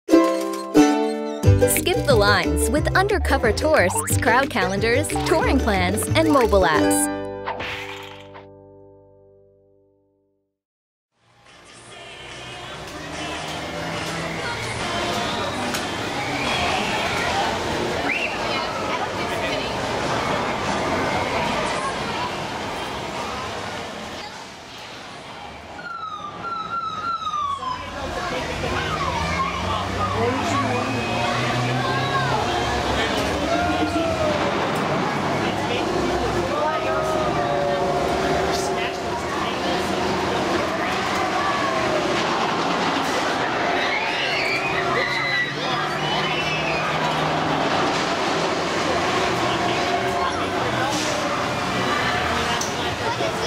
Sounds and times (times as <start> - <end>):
Bus: 11.2 - 53.4.